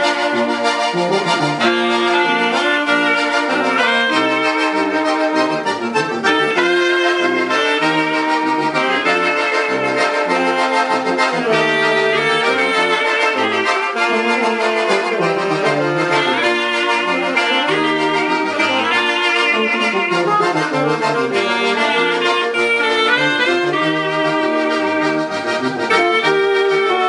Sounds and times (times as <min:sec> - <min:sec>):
Brass instrument: 0:00.0 - 0:27.0
Clarinet: 0:00.0 - 0:27.0.